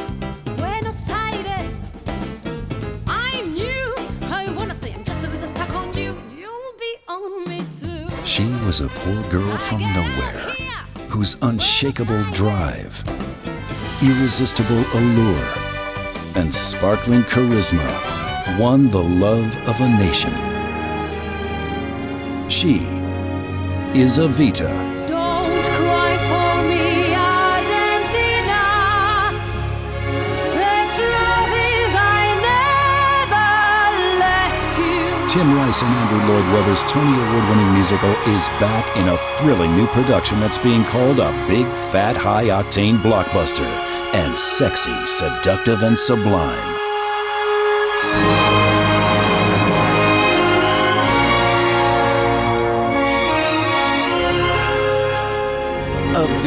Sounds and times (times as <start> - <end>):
Music: 0.0 - 56.4
Speech: 3.1 - 13.0, 14.0 - 15.6, 16.4 - 20.4, 22.5 - 23.0, 24.0 - 24.9, 35.2 - 46.8, 56.1 - 56.4.